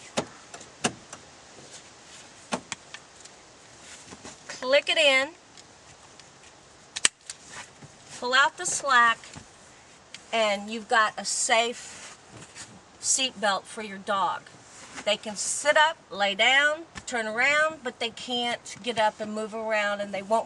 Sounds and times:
Speech: 0:04.6 - 0:05.4, 0:08.2 - 0:09.3, 0:10.3 - 0:11.8, 0:13.0 - 0:20.4.

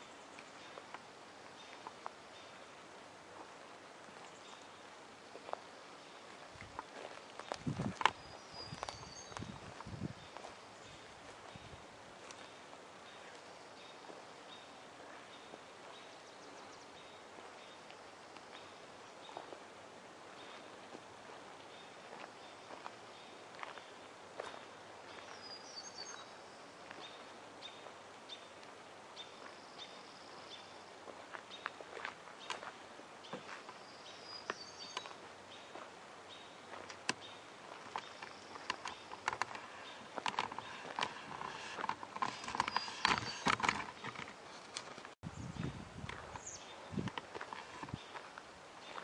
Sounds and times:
Walk, footsteps: 0:03.4 - 0:10.6, 0:12.2 - 0:12.6, 0:19.3 - 0:19.6, 0:20.5 - 0:25.5, 0:31.1 - 0:33.8, 0:36.7 - 0:45.2, 0:46.0 - 0:49.0.

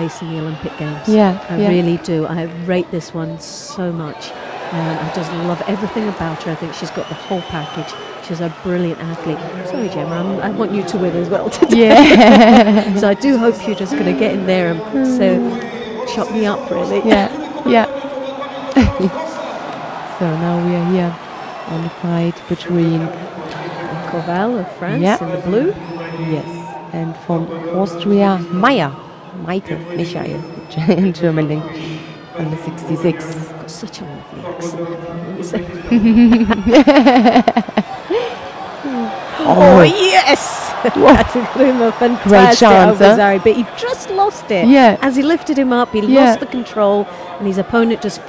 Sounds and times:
Speech: 0:00.0 - 0:19.5, 0:20.2 - 0:48.2.

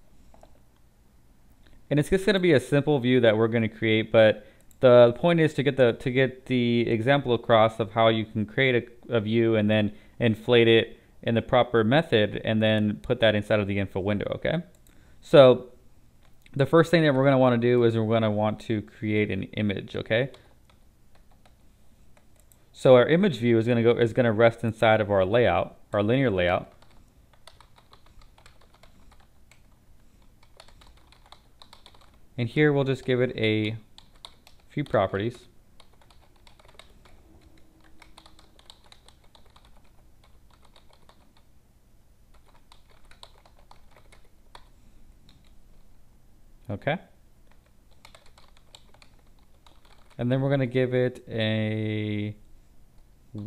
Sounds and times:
Speech: 0:01.9 - 0:15.8, 0:16.5 - 0:20.5, 0:22.8 - 0:26.7, 0:32.4 - 0:33.9, 0:34.7 - 0:35.5, 0:46.7 - 0:47.2, 0:50.2 - 0:52.4
Typing: 0:20.3 - 0:21.6, 0:26.7 - 0:32.2, 0:33.6 - 0:35.0, 0:35.8 - 0:41.5, 0:42.3 - 0:44.7, 0:47.5 - 0:50.2.

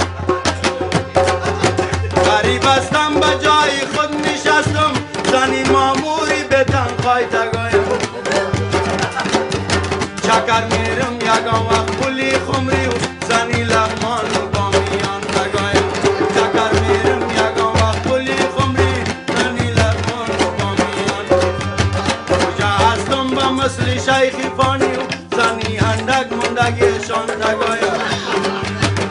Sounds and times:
Music: 0:00.0 - 0:29.1.

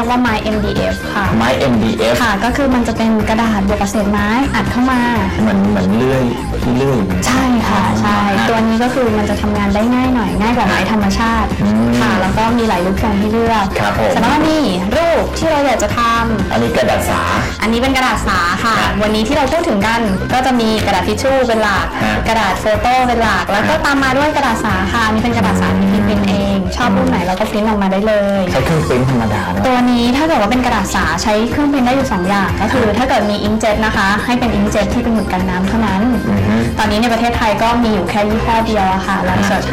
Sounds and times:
Music: 0:00.0 - 0:39.7
Speech: 0:00.0 - 0:39.7.

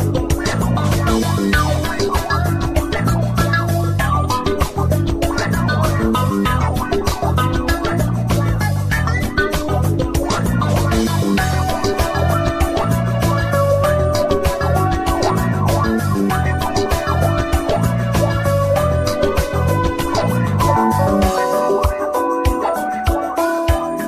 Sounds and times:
Music: 0:00.0 - 0:24.0.

